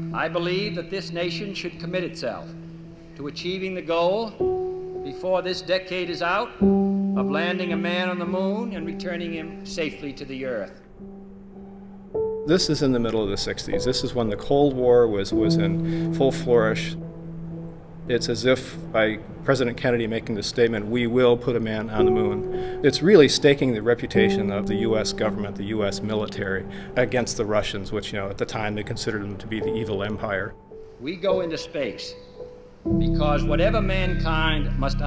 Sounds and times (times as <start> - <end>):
Music: 0.0 - 35.0
Speech: 0.2 - 2.5, 3.2 - 4.4, 5.1 - 6.6, 7.2 - 10.8, 12.5 - 17.0, 18.1 - 32.2, 33.0 - 35.0.